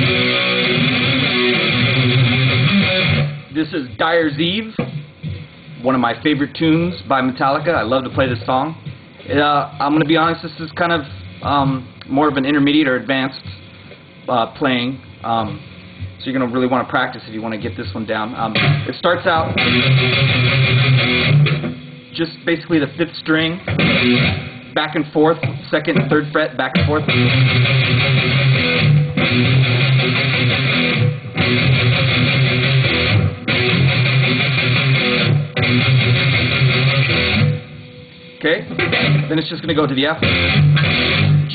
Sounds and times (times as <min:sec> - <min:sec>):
Strum: 0:00.0 - 0:03.6, 0:18.5 - 0:22.1, 0:23.6 - 0:41.5
Electric guitar: 0:00.0 - 0:14.3, 0:17.8 - 0:41.5.